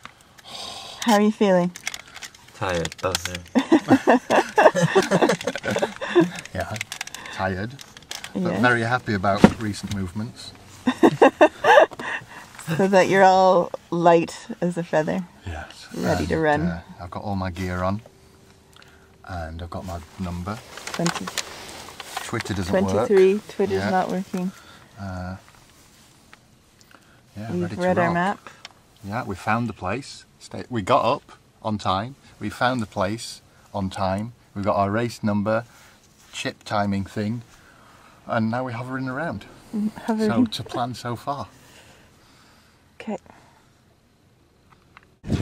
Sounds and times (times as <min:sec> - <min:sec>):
Laughter: 0:03.6 - 0:06.4, 0:10.9 - 0:12.4
Speech: 0:08.4 - 0:10.5, 0:14.7 - 0:18.0, 0:22.3 - 0:25.4, 0:27.4 - 0:28.4, 0:40.0 - 0:41.4.